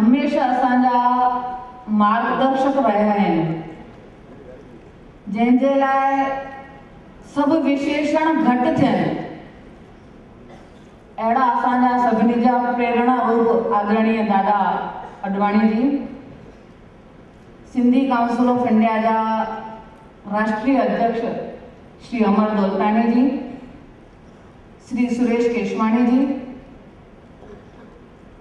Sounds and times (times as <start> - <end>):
Female speech, woman speaking: 0.0 - 3.6, 5.3 - 6.6, 7.3 - 9.4, 11.2 - 16.2, 17.7 - 19.7, 20.3 - 23.6, 24.9 - 26.5
Narration, monologue: 0.0 - 28.4.